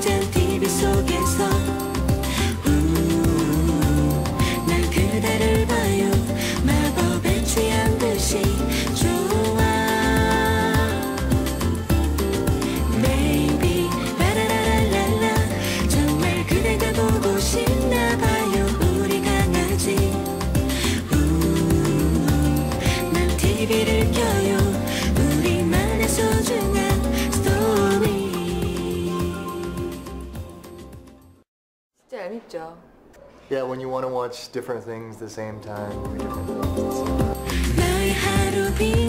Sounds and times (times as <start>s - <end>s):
Singing: 0.0s - 11.9s, 12.6s - 30.5s, 36.0s - 39.0s
Music: 0.0s - 31.5s, 34.8s - 39.0s
Female speech, woman speaking: 32.0s - 32.8s.